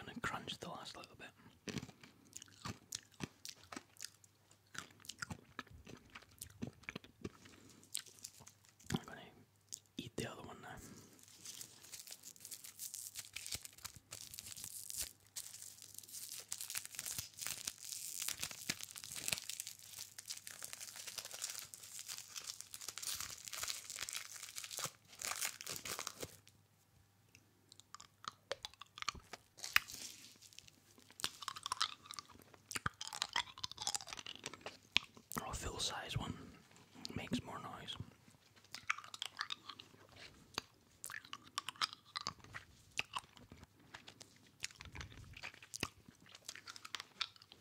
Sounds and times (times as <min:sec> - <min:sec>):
Speech: 0:00.0 - 0:01.4, 0:35.4 - 0:36.5, 0:37.1 - 0:38.0
Crunch: 0:01.5 - 0:09.9, 0:10.6 - 0:26.6, 0:27.7 - 0:36.1, 0:37.0 - 0:47.6.